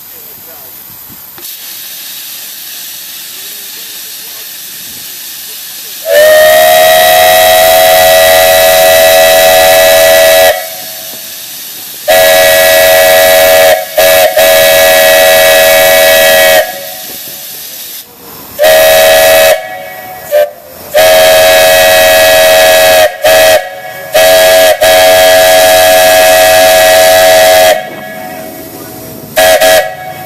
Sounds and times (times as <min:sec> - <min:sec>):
Steam whistle: 0:06.0 - 0:11.3, 0:12.1 - 0:17.2, 0:18.6 - 0:28.6, 0:29.4 - 0:30.2.